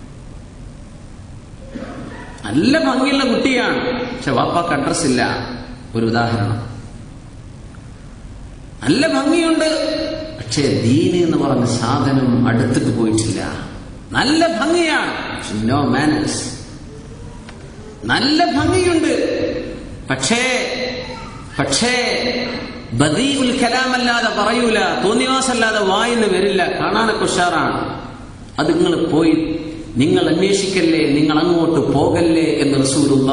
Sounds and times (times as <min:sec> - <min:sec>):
Narration, monologue: 0:00.0 - 0:33.3
Male speech, man speaking: 0:02.4 - 0:06.8, 0:08.8 - 0:16.7, 0:18.0 - 0:21.0, 0:21.6 - 0:33.3.